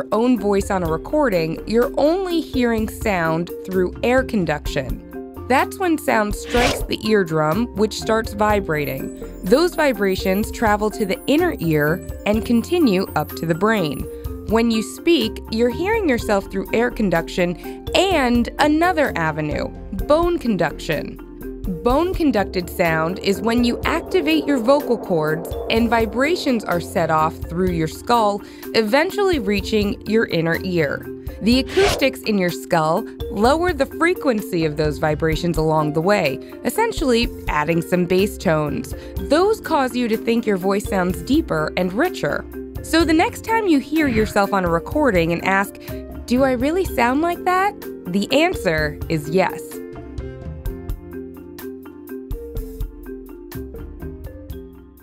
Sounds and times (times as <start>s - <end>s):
Speech: 0.0s - 49.8s
Music: 0.0s - 55.0s.